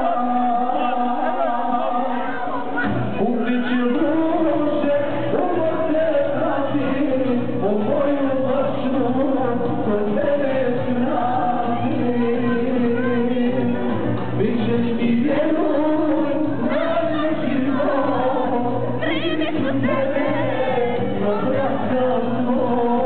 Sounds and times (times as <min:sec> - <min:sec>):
Crowd: 0:00.0 - 0:23.0
Inside, large room or hall: 0:00.0 - 0:23.0
Music: 0:00.0 - 0:23.0
Singing: 0:00.0 - 0:23.0.